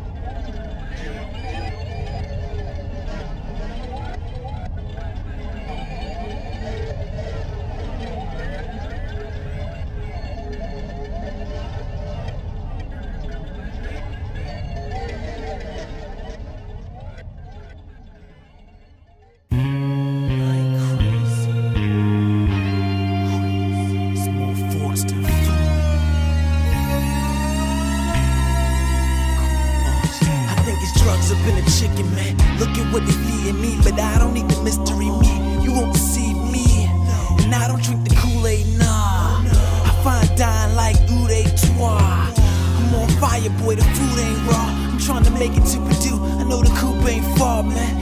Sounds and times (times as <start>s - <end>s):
Music: 19.4s - 48.0s
Speech: 20.3s - 21.7s, 23.1s - 25.8s, 28.3s - 48.0s.